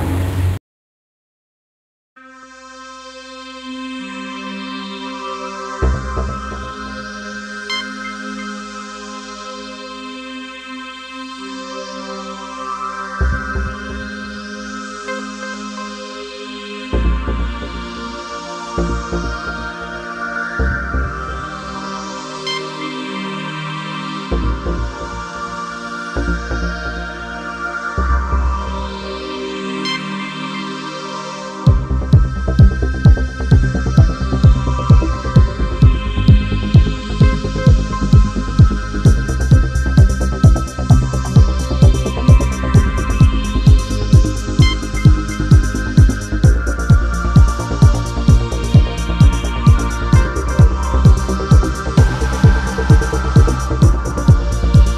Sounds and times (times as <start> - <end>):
Music: 2.2 - 54.9.